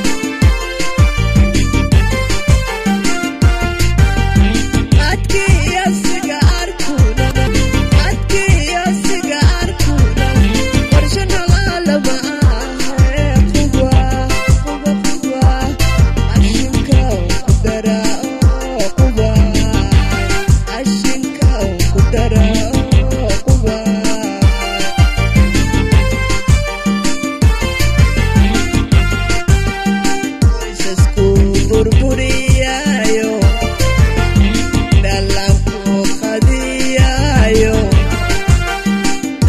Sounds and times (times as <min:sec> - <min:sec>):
Music: 0:00.0 - 0:39.4.